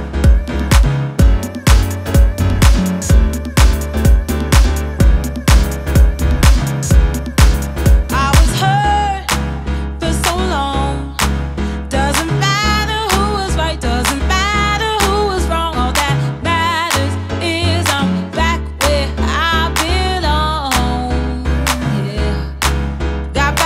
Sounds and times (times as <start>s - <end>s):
Music: 0.0s - 23.6s.